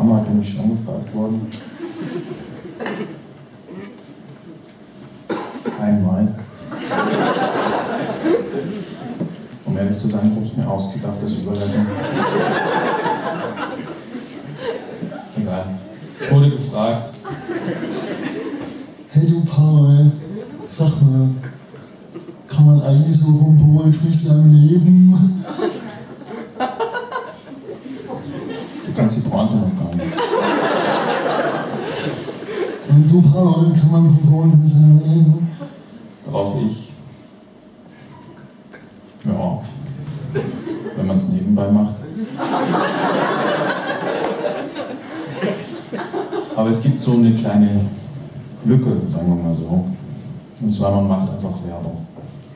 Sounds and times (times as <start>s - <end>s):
Speech: 0.0s - 1.6s, 5.7s - 6.5s, 9.6s - 12.1s, 15.2s - 17.3s, 19.1s - 21.6s, 22.5s - 25.5s, 28.8s - 30.2s, 32.9s - 35.6s, 36.2s - 37.1s, 39.2s - 40.1s, 40.9s - 42.2s, 46.6s - 52.2s.